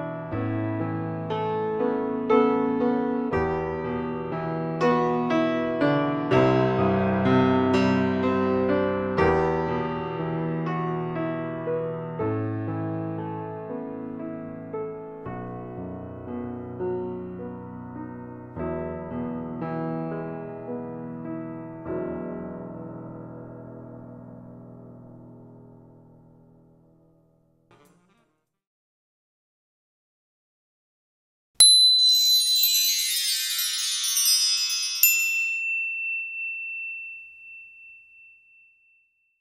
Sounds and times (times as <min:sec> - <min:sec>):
Ding: 0:31.6 - 0:32.8, 0:35.0 - 0:39.4.